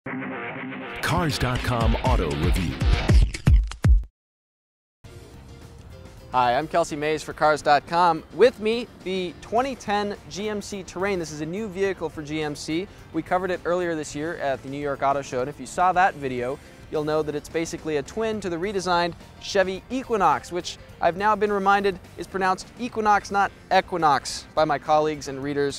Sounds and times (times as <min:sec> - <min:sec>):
Music: 0:00.1 - 0:04.1, 0:05.0 - 0:25.7
Speech: 0:01.0 - 0:02.9, 0:06.3 - 0:25.7.